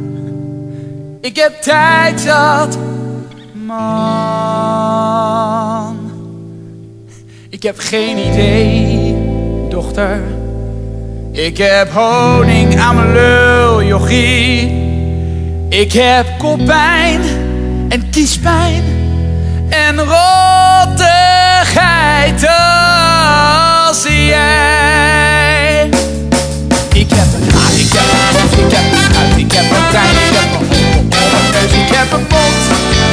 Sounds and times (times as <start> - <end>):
Music: 0.0 - 33.1.